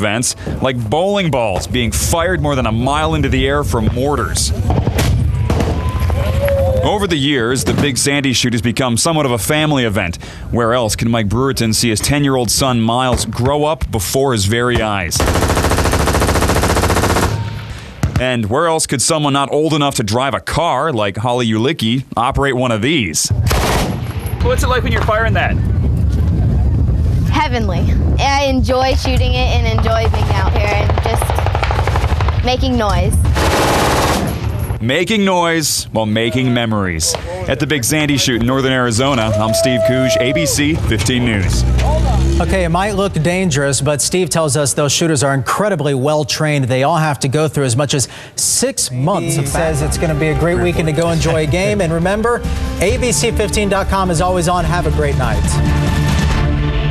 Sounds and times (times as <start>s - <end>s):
Speech: 6.8s - 15.2s, 18.2s - 23.3s, 27.4s - 31.4s, 34.8s - 55.6s
Machine gun: 15.2s - 17.6s, 23.5s - 24.1s, 30.2s - 32.5s, 33.2s - 34.6s.